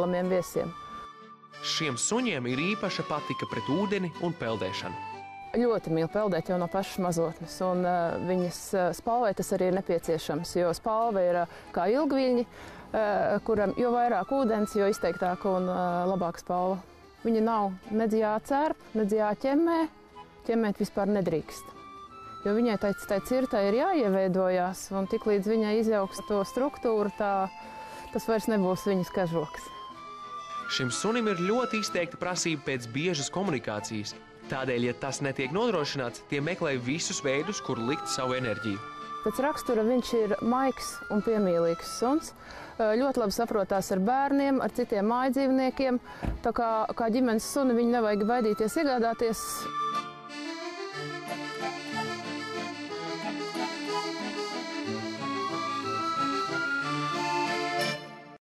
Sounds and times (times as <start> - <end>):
Accordion: 0.0 - 58.4.